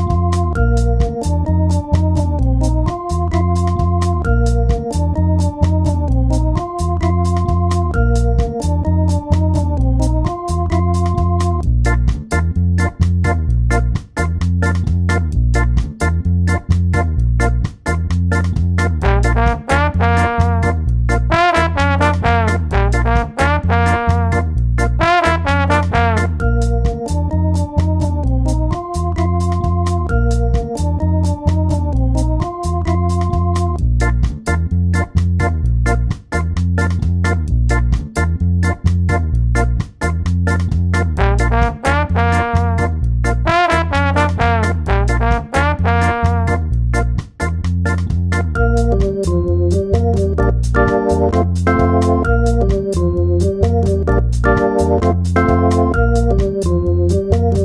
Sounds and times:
Electronic music: 0:00.0 - 0:11.7, 0:19.0 - 0:20.8, 0:25.1 - 0:33.8, 0:41.2 - 0:46.7, 0:48.6 - 0:57.6.

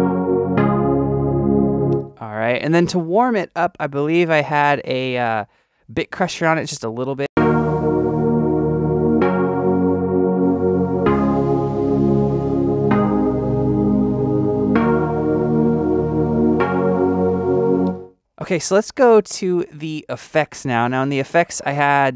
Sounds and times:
Synthesizer: 0:00.0 - 0:02.2, 0:07.4 - 0:18.2
Speech: 0:02.2 - 0:07.3, 0:18.4 - 0:22.1.

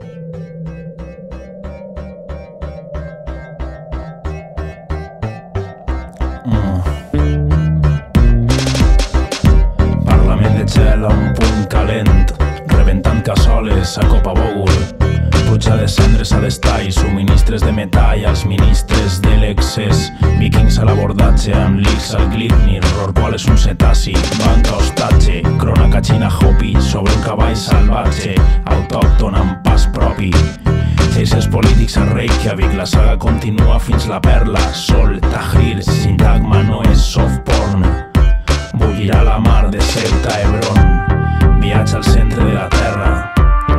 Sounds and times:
Music: 0:00.0 - 0:43.7.

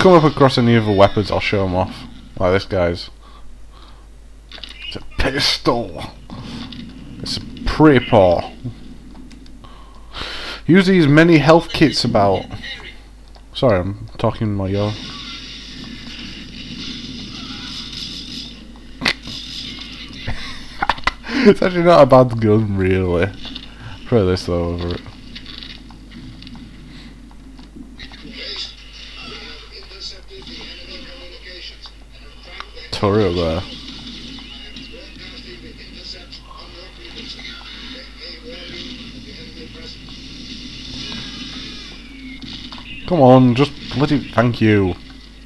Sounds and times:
Speech: 0:28.3 - 0:33.8, 0:43.1 - 0:45.0.

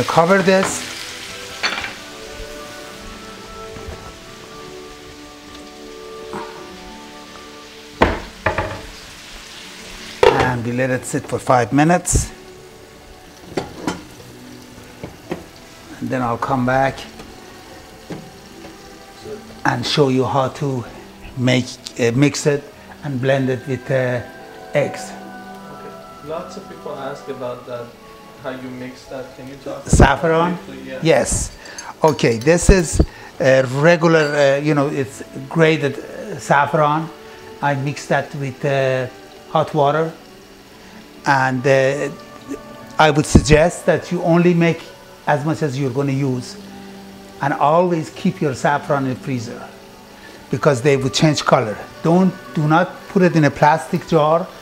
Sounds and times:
Speech: 0:00.0 - 0:00.9, 0:10.2 - 0:12.4, 0:16.0 - 0:17.1, 0:26.2 - 0:40.2, 0:41.3 - 0:42.2, 0:43.0 - 0:46.6, 0:47.4 - 0:49.7, 0:50.5 - 0:54.5
Music: 0:00.0 - 0:54.6.

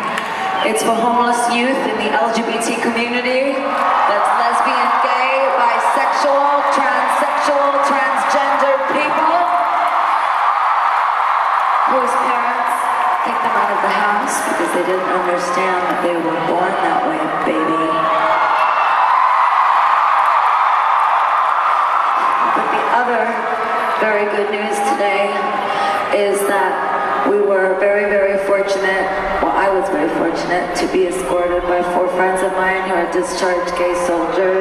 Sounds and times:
Speech: 0:00.6 - 0:09.8, 0:11.9 - 0:18.1, 0:22.4 - 0:34.6.

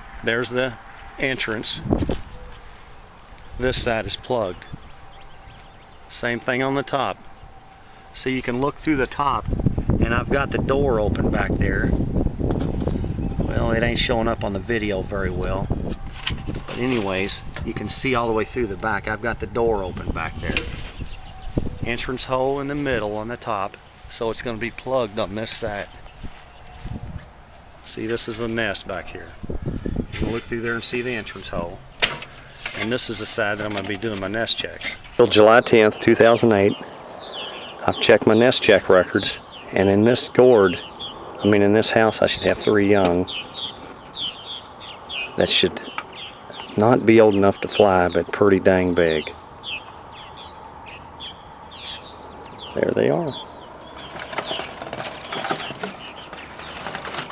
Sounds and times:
Bird: 0:00.0 - 0:57.3
Speech: 0:00.2 - 0:01.9, 0:03.6 - 0:04.8, 0:06.1 - 0:07.2, 0:08.2 - 0:12.0, 0:13.5 - 0:15.7, 0:16.7 - 0:20.8, 0:21.8 - 0:26.0, 0:27.8 - 0:29.4, 0:30.2 - 0:31.8, 0:32.7 - 0:36.9, 0:37.8 - 0:40.8, 0:41.4 - 0:43.3, 0:45.4 - 0:46.0, 0:46.7 - 0:49.4, 0:52.7 - 0:53.4.

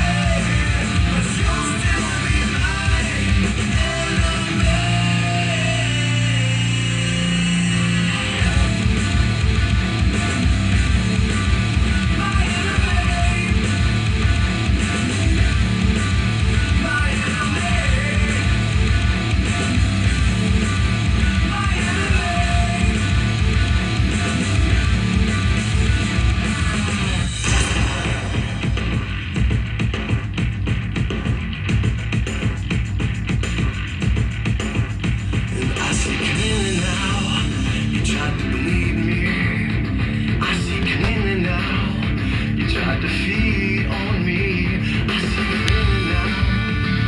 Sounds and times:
Music: 0:00.0 - 0:47.0.

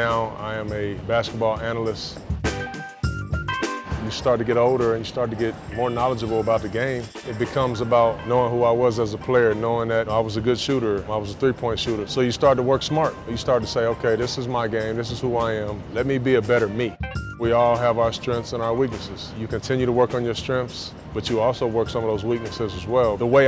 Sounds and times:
Speech: 0:00.0 - 0:02.2, 0:04.0 - 0:23.4
Music: 0:00.0 - 0:23.4.

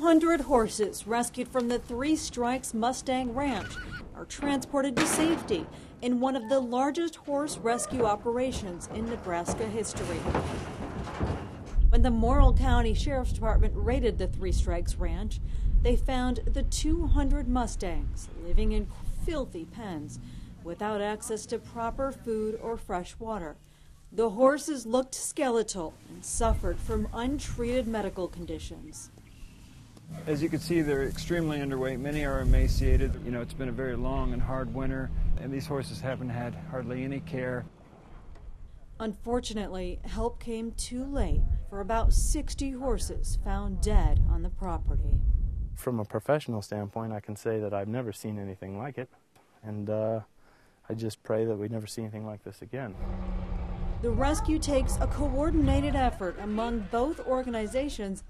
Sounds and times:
Speech: 0:00.0 - 0:10.3, 0:12.0 - 0:23.6, 0:24.2 - 0:29.1, 0:30.2 - 0:37.6, 0:39.0 - 0:45.1, 0:45.8 - 0:49.1, 0:49.7 - 0:50.3, 0:50.9 - 0:53.0, 0:54.1 - 0:58.2.

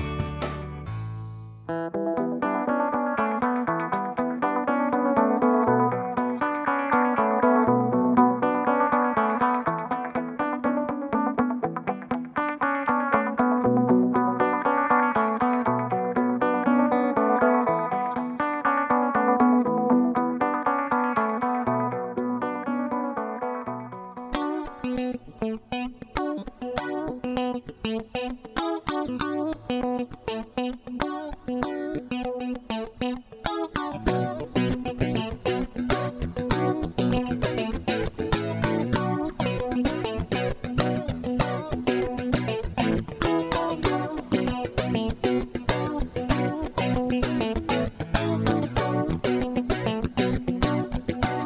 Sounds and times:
Music: 0:00.0 - 0:51.4.

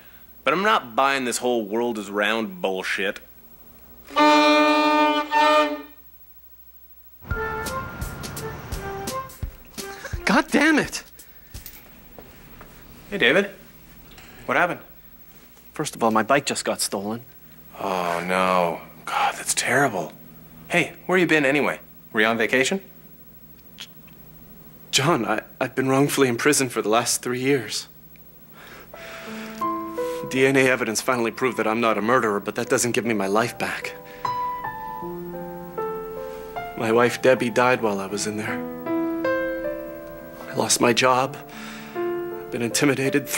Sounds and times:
Speech: 0:00.5 - 0:03.3, 0:10.2 - 0:11.1, 0:15.8 - 0:22.9, 0:24.9 - 0:28.0, 0:30.3 - 0:34.0, 0:36.8 - 0:38.6, 0:40.5 - 0:41.4, 0:42.5 - 0:43.3.

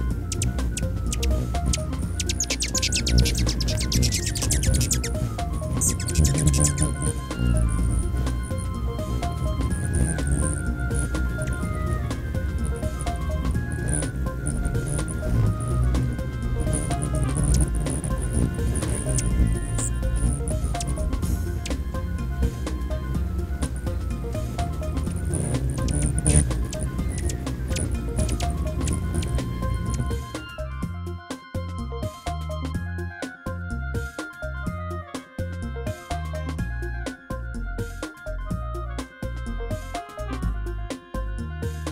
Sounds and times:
Music: 0:00.0 - 0:41.9.

